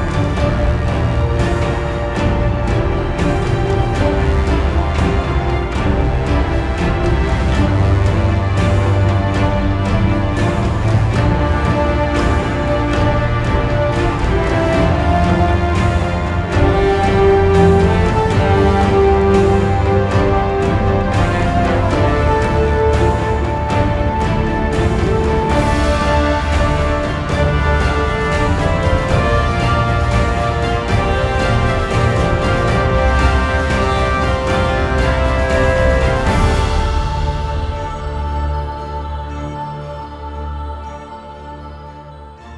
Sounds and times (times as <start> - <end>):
Music: 0.0 - 42.5.